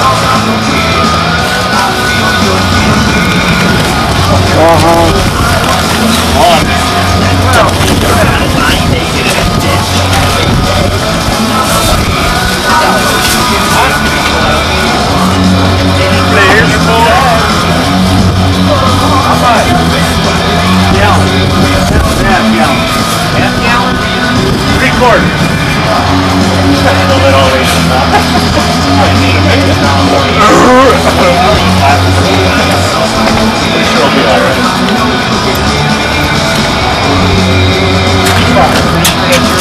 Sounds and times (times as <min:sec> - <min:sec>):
Music: 0:00.0 - 0:39.6
Speech: 0:04.2 - 0:36.2, 0:38.2 - 0:39.6.